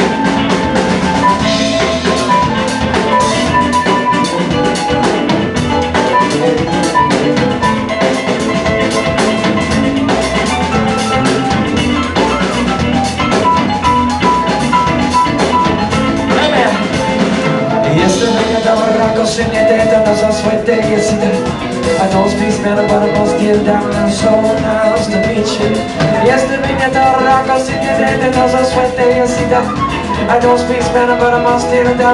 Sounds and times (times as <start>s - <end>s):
Blues: 0.0s - 32.1s
Guitar: 0.0s - 32.1s.